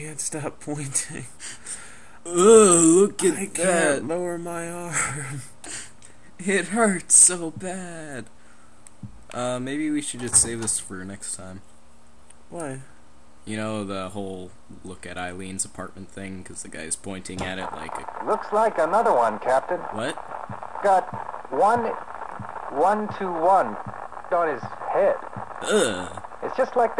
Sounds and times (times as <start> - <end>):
Speech: 0.0 - 1.3, 2.3 - 5.4, 6.4 - 8.3, 9.3 - 11.6, 12.5 - 12.9, 13.5 - 20.2, 20.8 - 22.0, 22.7 - 23.8, 24.4 - 26.9
Radio: 3.5 - 4.0, 17.2 - 26.9.